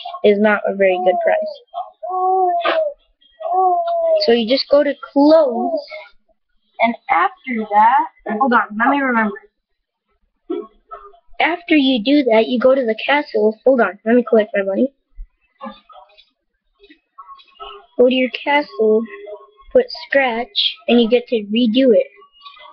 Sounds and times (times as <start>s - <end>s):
Speech: 0.0s - 6.1s, 6.8s - 9.4s, 10.5s - 14.9s, 15.6s - 16.2s, 17.2s - 22.7s.